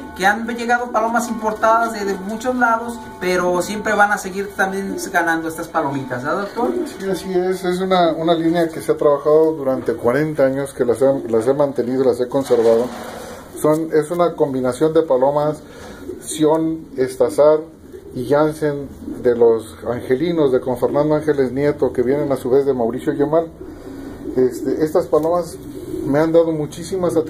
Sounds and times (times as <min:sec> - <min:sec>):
Speech: 0:00.2 - 0:13.0, 0:13.6 - 0:15.6, 0:16.2 - 0:23.5, 0:24.4 - 0:27.3
Pigeon, dove: 0:17.6 - 0:21.6, 0:22.6 - 0:27.3.